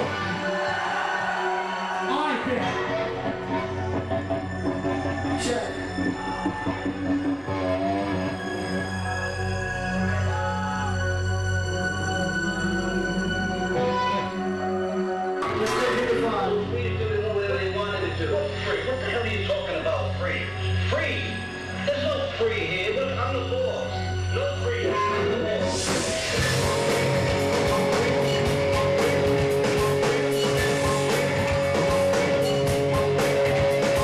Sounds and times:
Music: 0.0 - 34.0
Speech: 15.5 - 25.9.

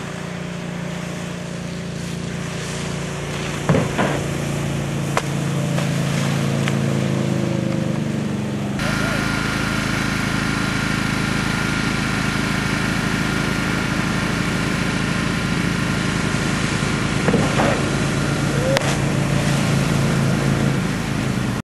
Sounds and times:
Stream: 0.0 - 21.6.

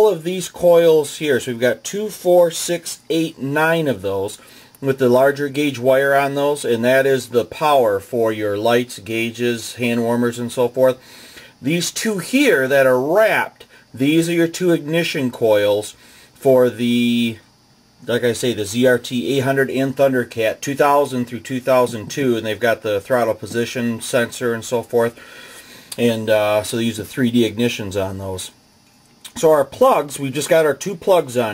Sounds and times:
Speech: 0.0 - 11.0, 11.6 - 25.2, 26.0 - 28.6, 29.3 - 31.5.

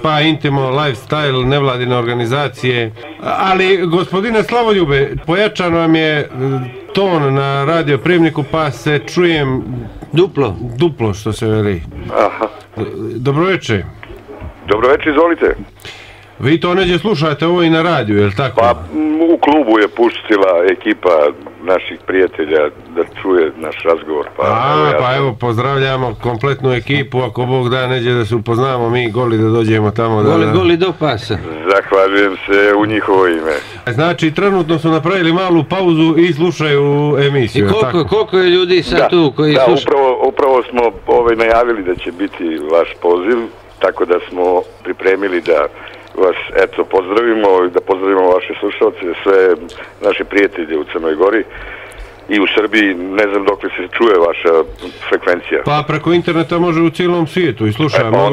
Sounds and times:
Speech: 0.0 - 15.7, 16.4 - 51.6, 52.3 - 58.3.

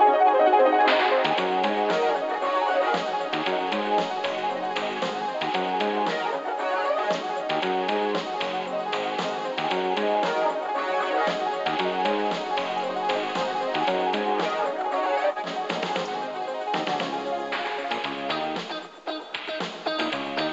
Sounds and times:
Music: 0.0 - 20.5.

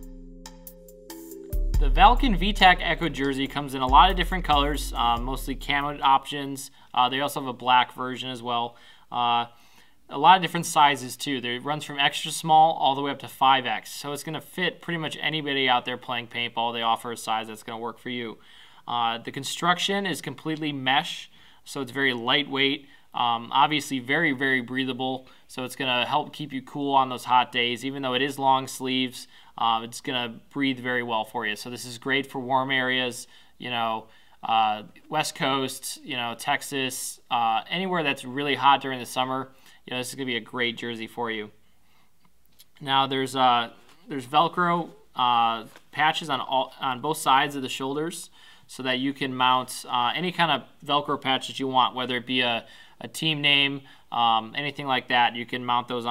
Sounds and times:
Speech: 1.8 - 41.6, 42.8 - 56.1.

